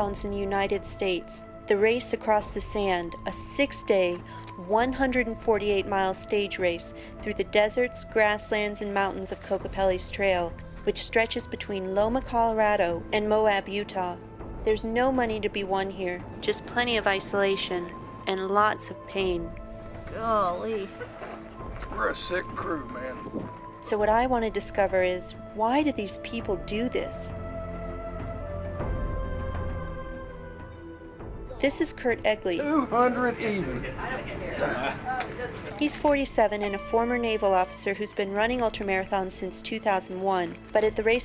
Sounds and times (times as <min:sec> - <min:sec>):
Speech: 0:00.0 - 0:19.5, 0:20.1 - 0:20.9, 0:22.0 - 0:23.2, 0:23.8 - 0:27.3, 0:31.6 - 0:41.2
Music: 0:00.0 - 0:41.2.